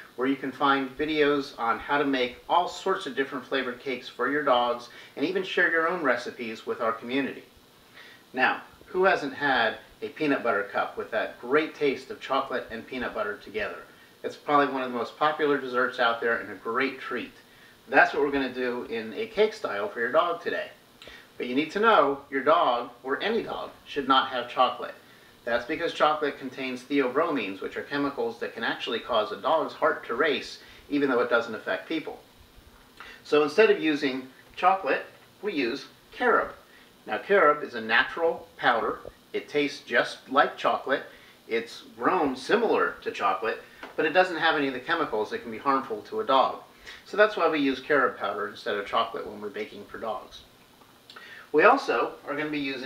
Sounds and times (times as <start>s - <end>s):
Speech: 0.0s - 7.5s, 8.3s - 20.8s, 21.4s - 32.3s, 33.1s - 50.5s, 51.5s - 52.8s.